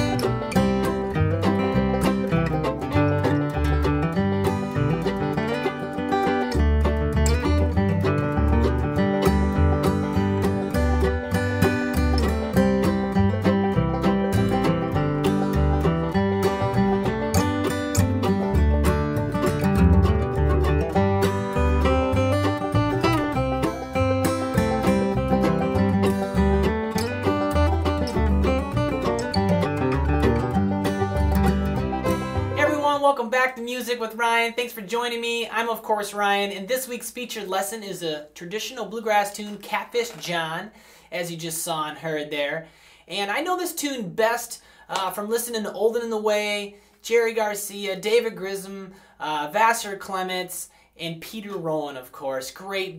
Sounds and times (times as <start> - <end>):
Guitar: 0.0 - 52.9.